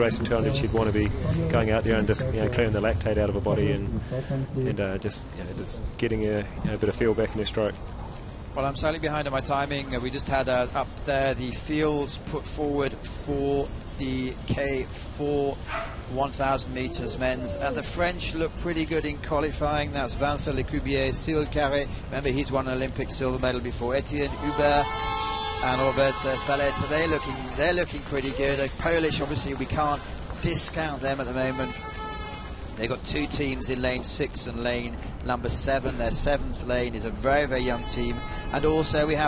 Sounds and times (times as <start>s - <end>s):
Speech: 0.0s - 7.8s, 8.6s - 24.9s, 25.6s - 31.8s, 32.8s - 39.2s.